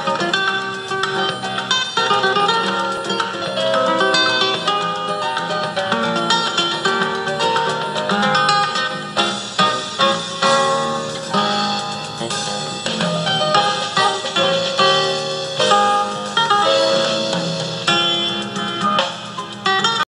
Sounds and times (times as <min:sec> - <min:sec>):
Music: 0:00.0 - 0:20.0.